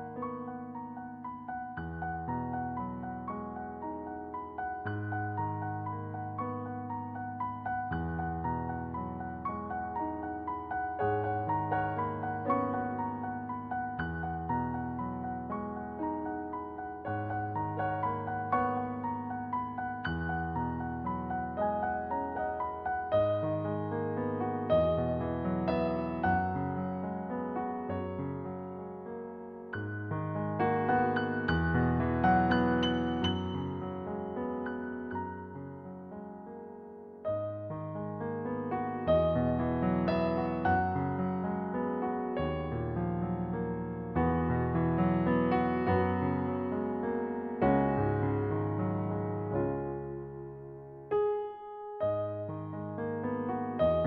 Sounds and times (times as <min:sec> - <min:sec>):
Music: 0:00.0 - 0:54.0.